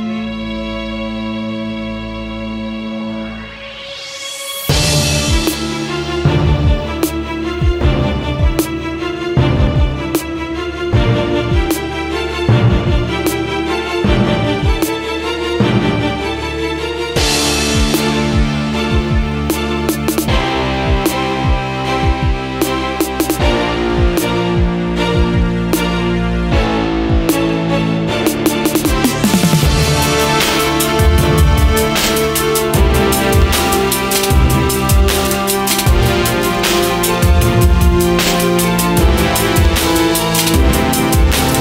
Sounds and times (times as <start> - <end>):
Orchestra: 0.0 - 41.6.